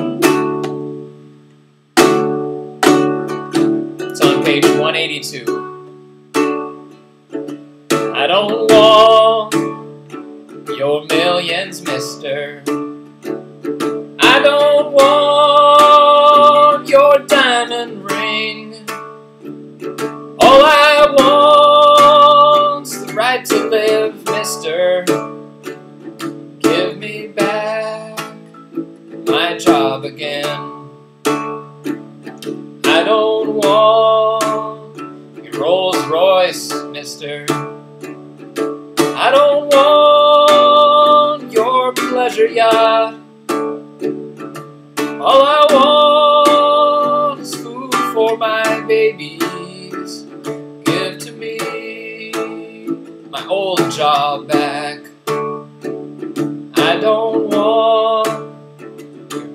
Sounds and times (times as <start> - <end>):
Music: 0.0 - 59.5
Male singing: 4.1 - 5.6, 8.1 - 9.8, 10.7 - 12.9, 14.2 - 19.0, 20.4 - 25.4, 26.6 - 28.5, 29.3 - 30.9, 32.8 - 37.8, 39.1 - 43.3, 45.1 - 55.3, 56.7 - 58.6.